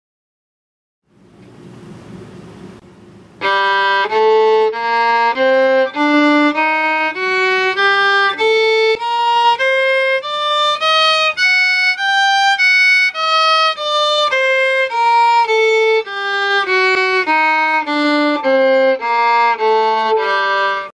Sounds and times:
Violin, fiddle: 3.4 - 20.9.

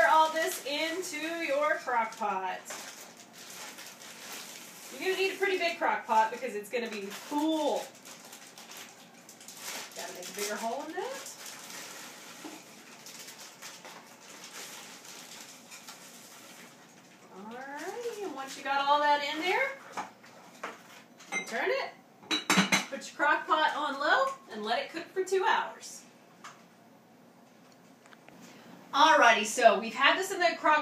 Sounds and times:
Speech: 0.0 - 2.7, 4.9 - 7.9, 10.0 - 11.4, 17.3 - 19.8, 21.4 - 22.0, 22.9 - 26.1, 29.0 - 30.8
Dishes, pots, and pans: 22.3 - 22.9.

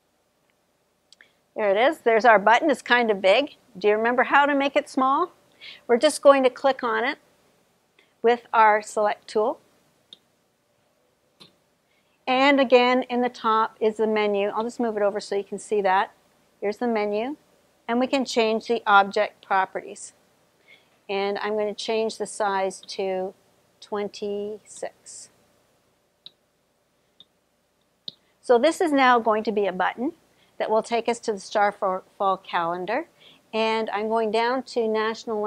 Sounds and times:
Speech: 1.6 - 7.2, 8.2 - 9.6, 12.3 - 20.2, 21.1 - 25.3, 28.5 - 35.4.

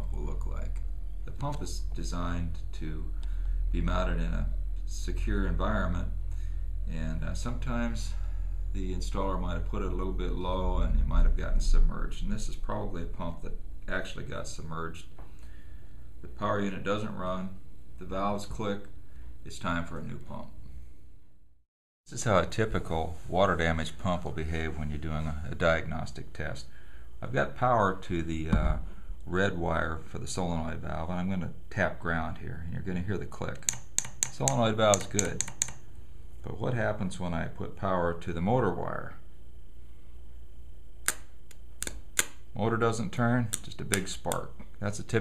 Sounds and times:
Speech: 0.0 - 6.2, 6.9 - 8.2, 8.8 - 15.2, 16.2 - 20.6, 22.1 - 35.5, 36.4 - 39.3, 42.6 - 45.2
Inside, small room: 0.0 - 45.2.

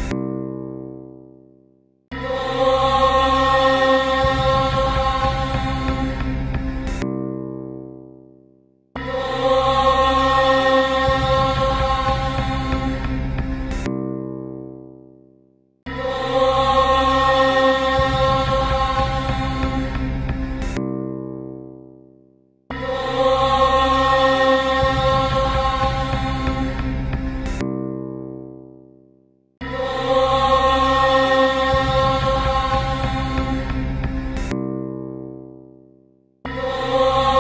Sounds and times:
Mantra: 2.2 - 6.5, 9.0 - 13.2, 15.9 - 20.2, 22.7 - 27.0, 29.6 - 34.0, 36.5 - 37.4.

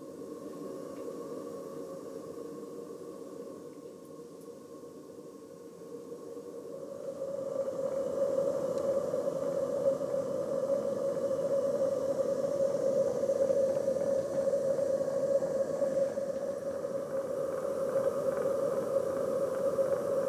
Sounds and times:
Whale vocalization: 0.0 - 20.2.

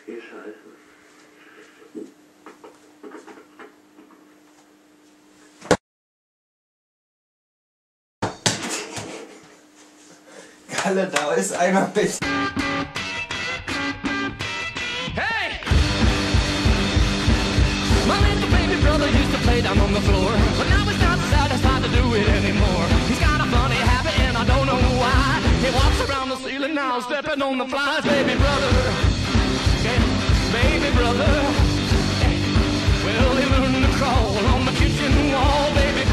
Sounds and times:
Speech: 0.0 - 0.8, 10.7 - 12.2
Music: 12.2 - 36.1.

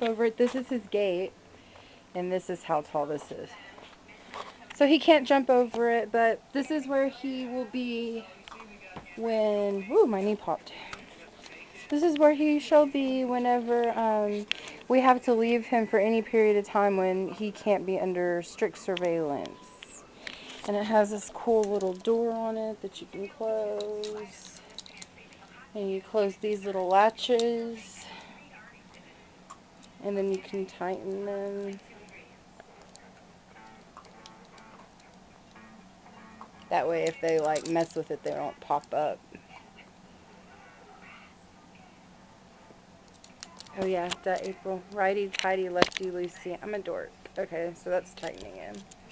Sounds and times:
Speech: 2.2 - 20.0, 20.7 - 28.8, 30.0 - 32.4, 36.7 - 39.6, 43.7 - 48.8.

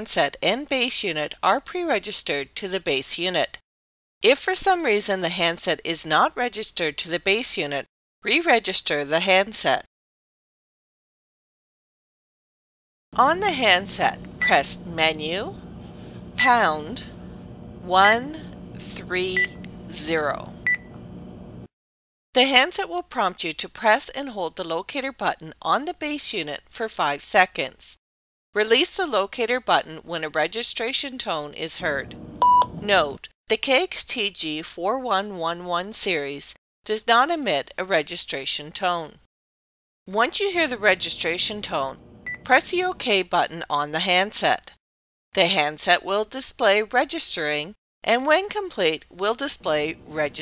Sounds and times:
Speech: 0.0 - 3.6, 4.3 - 9.9, 13.2 - 15.6, 16.4 - 17.1, 17.9 - 20.6, 22.4 - 28.0, 28.6 - 32.1, 32.8 - 39.2, 40.1 - 44.8, 45.4 - 50.4.

